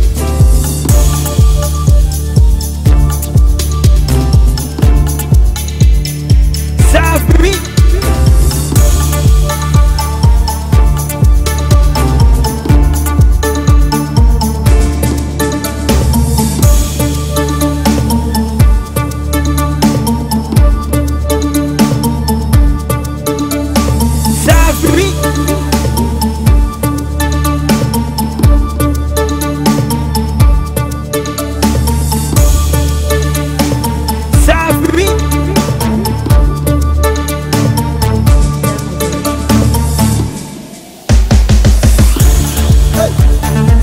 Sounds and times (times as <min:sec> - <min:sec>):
Afrobeat: 0:00.0 - 0:43.8.